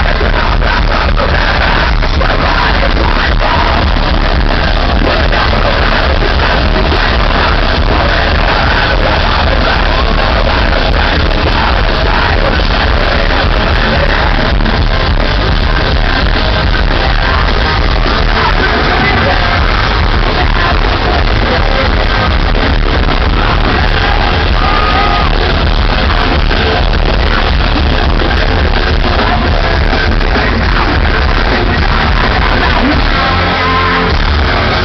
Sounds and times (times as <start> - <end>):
Rhythm and blues: 0.0 - 34.8.